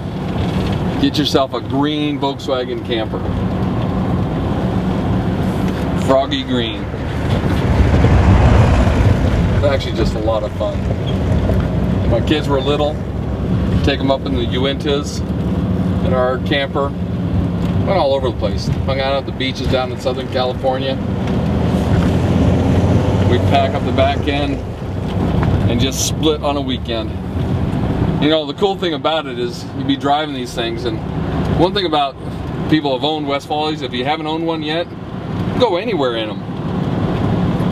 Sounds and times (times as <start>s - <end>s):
Vehicle: 0.0s - 37.7s.